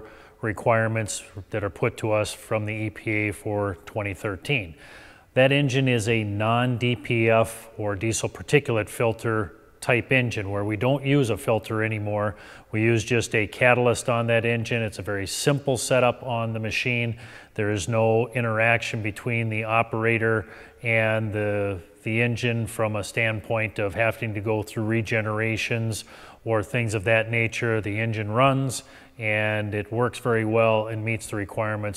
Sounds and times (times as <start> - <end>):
Speech: 0.0 - 4.8, 5.4 - 31.9.